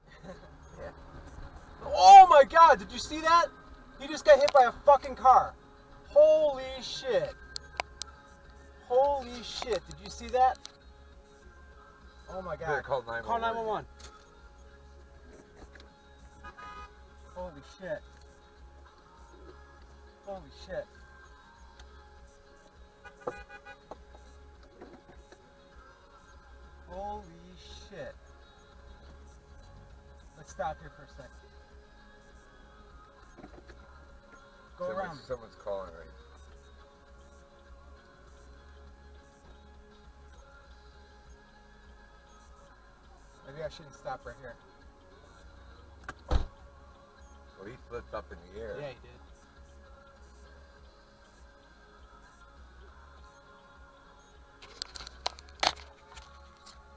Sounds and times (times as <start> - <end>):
Music: 0.0 - 56.9.